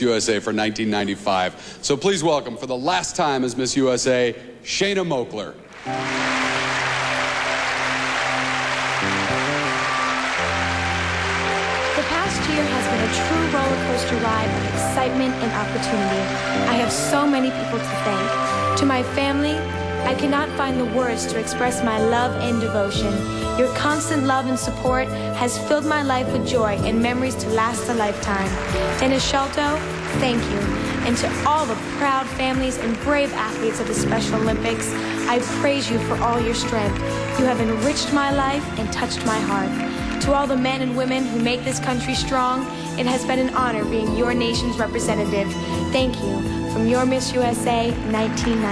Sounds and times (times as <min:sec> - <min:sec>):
Music: 0:00.0 - 0:04.1, 0:05.6 - 0:48.7.